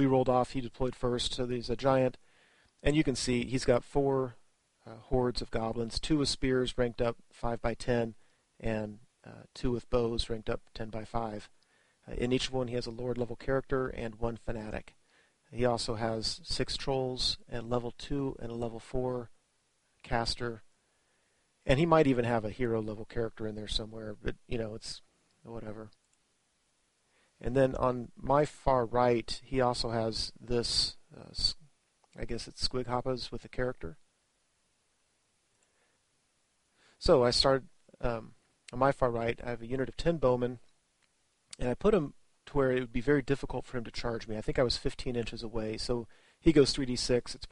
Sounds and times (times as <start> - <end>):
Speech: 0.0 - 2.2, 2.8 - 19.3, 20.0 - 20.7, 21.6 - 26.0, 27.4 - 34.0, 37.0 - 40.7, 41.5 - 47.5.